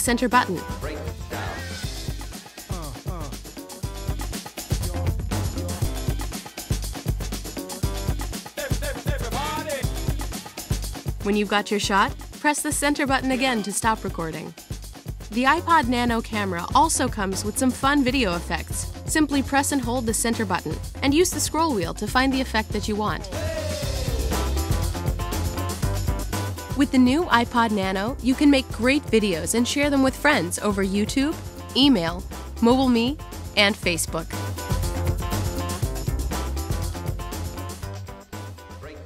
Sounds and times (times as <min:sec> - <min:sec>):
Speech: 0:00.0 - 0:01.1, 0:02.7 - 0:03.3, 0:11.2 - 0:14.5, 0:15.3 - 0:23.3, 0:26.8 - 0:34.4, 0:38.8 - 0:39.0
Music: 0:00.0 - 0:39.0.